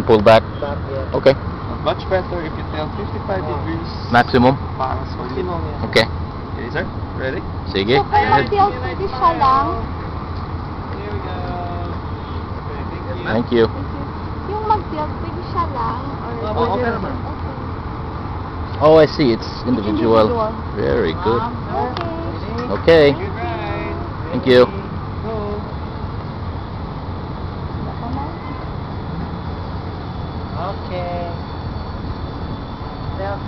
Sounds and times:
Outside, rural or natural: 0:00.0 - 0:33.4.

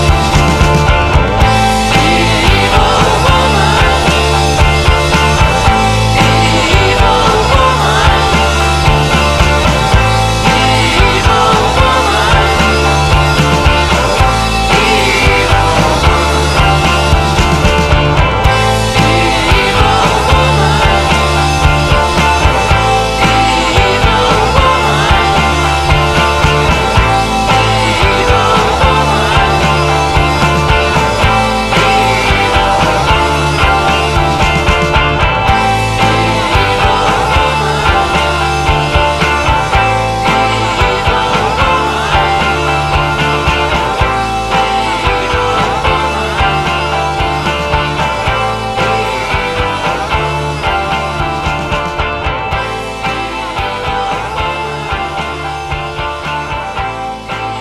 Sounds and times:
Rock music: 0:00.0 - 0:57.6.

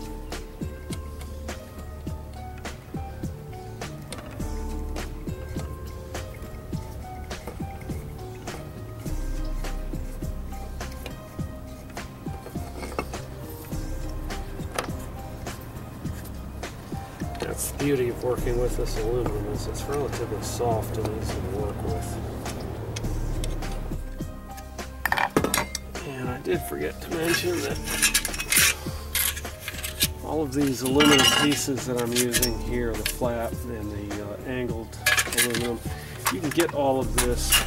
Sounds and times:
Music: 0:00.0 - 0:37.6
Speech: 0:17.4 - 0:22.2, 0:26.0 - 0:27.9, 0:30.2 - 0:37.6.

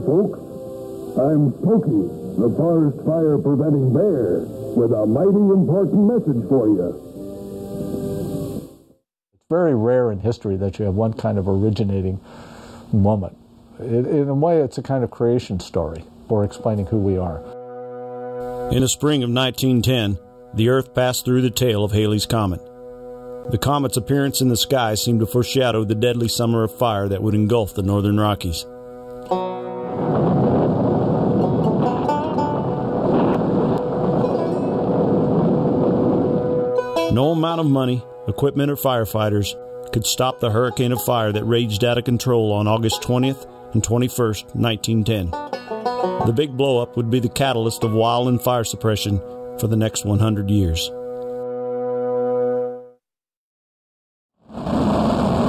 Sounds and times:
Speech: 0:00.0 - 0:00.4, 0:01.2 - 0:07.0, 0:09.5 - 0:12.2, 0:12.9 - 0:17.5, 0:18.7 - 0:22.6, 0:23.5 - 0:28.7, 0:37.1 - 0:45.4, 0:46.2 - 0:51.0
Music: 0:00.0 - 0:10.2, 0:15.4 - 0:53.0.

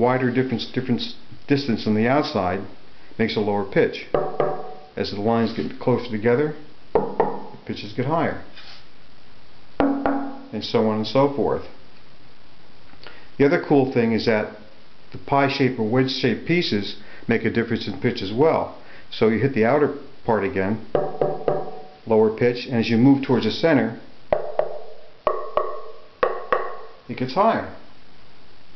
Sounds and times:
Speech: 0:00.0 - 0:04.1, 0:05.0 - 0:06.7, 0:07.6 - 0:08.5, 0:10.5 - 0:11.8, 0:13.4 - 0:20.9, 0:22.1 - 0:24.1, 0:27.1 - 0:27.9.

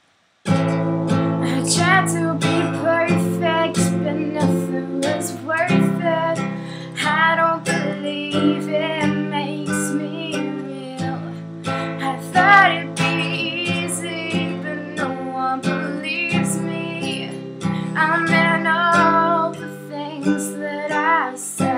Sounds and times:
Music: 0:00.4 - 0:21.7.

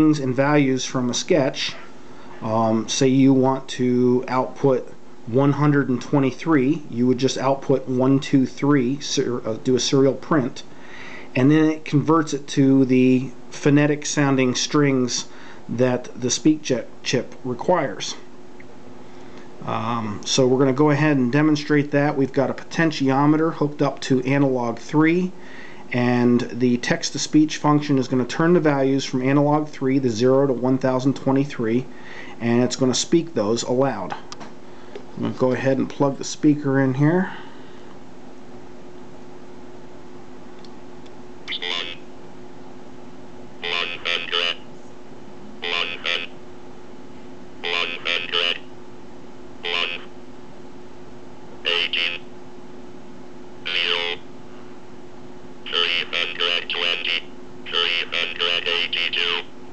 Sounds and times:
Speech synthesizer: 0:41.5 - 0:42.0, 0:43.6 - 0:44.6, 0:45.6 - 0:46.3, 0:47.6 - 0:48.6, 0:49.6 - 0:50.1, 0:51.7 - 0:52.2, 0:53.7 - 0:54.2, 0:55.7 - 0:59.5.

